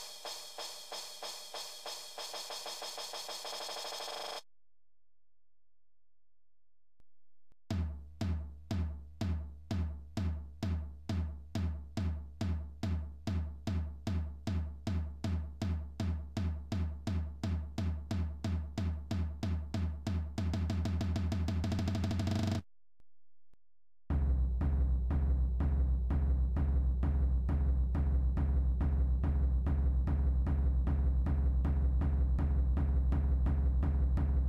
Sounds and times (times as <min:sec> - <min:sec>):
Music: 0:00.0 - 0:04.3, 0:07.7 - 0:22.6, 0:24.1 - 0:34.4.